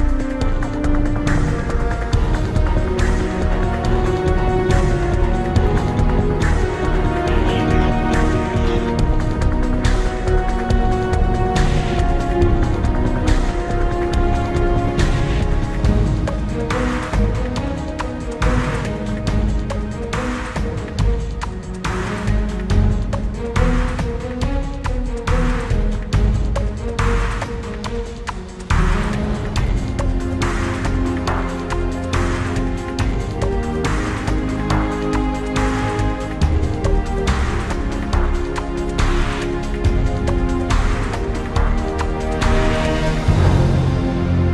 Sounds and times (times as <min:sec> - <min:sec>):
Exciting music: 0:00.0 - 0:44.5.